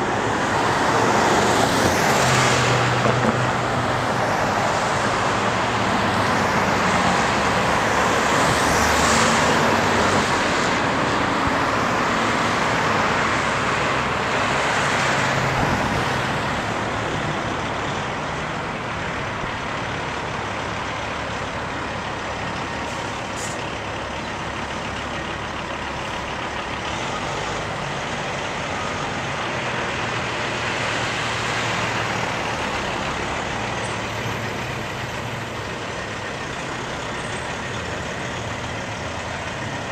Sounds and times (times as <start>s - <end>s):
Truck: 0.0s - 39.9s.